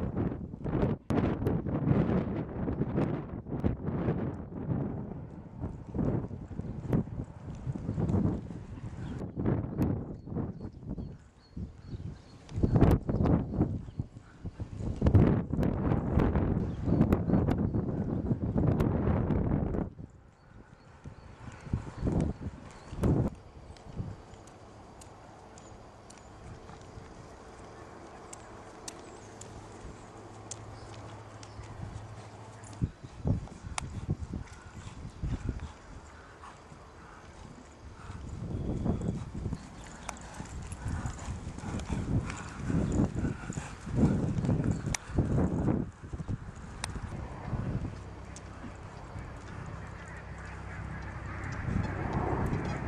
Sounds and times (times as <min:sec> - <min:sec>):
Clip-clop: 0:00.0 - 0:52.8.